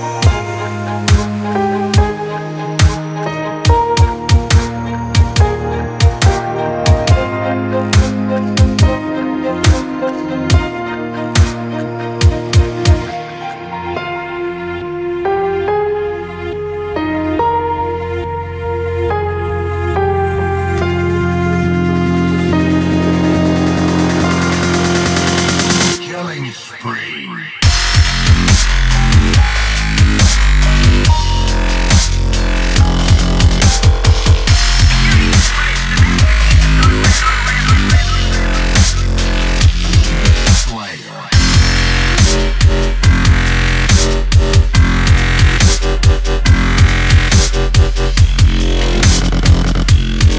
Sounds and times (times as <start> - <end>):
Electronic music: 0.0 - 50.3.